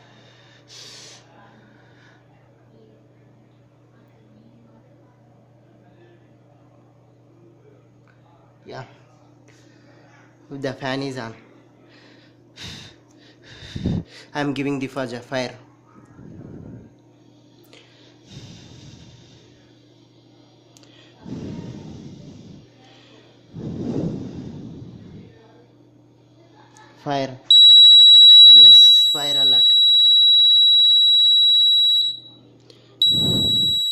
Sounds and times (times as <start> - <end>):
Speech: 1.2 - 9.3, 14.4 - 16.1, 25.1 - 27.5
Beep, bleep: 27.5 - 32.3, 33.0 - 33.9
Fire alarm: 27.5 - 32.4, 33.0 - 33.9.